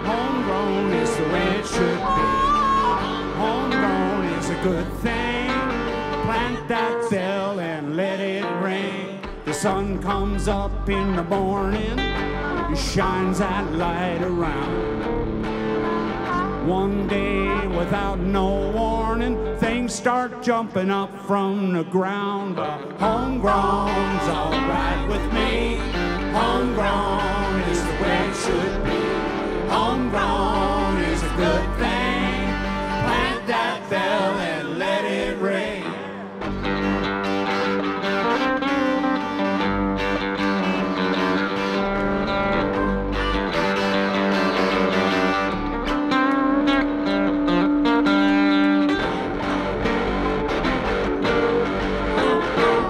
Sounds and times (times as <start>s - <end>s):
Singing: 0.0s - 14.8s, 16.0s - 36.3s
Country: 0.0s - 52.8s.